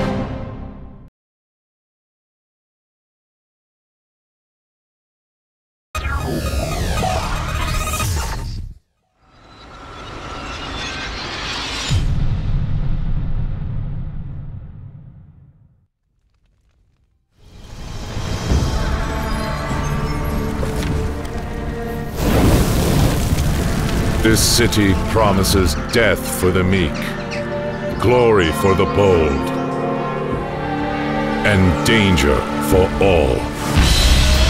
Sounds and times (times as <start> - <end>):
Music: 0.0 - 1.1, 17.4 - 34.4
Speech: 24.2 - 27.2, 28.0 - 29.6, 31.4 - 33.5.